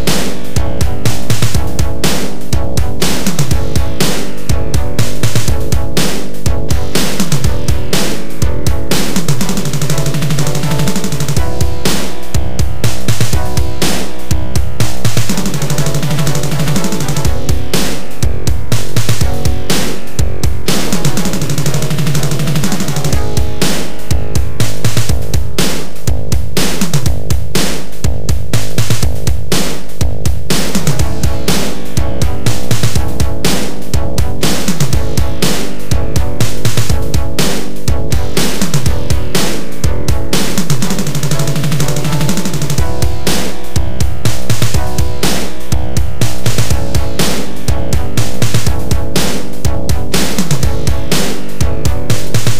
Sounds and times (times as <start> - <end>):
Theme music: 0.0 - 26.4, 30.5 - 52.5.